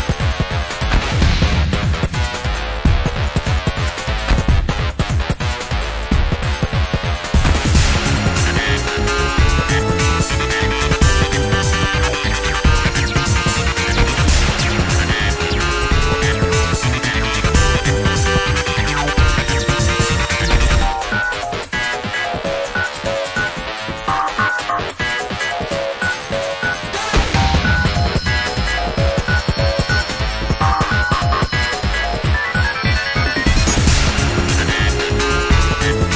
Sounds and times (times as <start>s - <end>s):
Background music: 0.0s - 36.1s.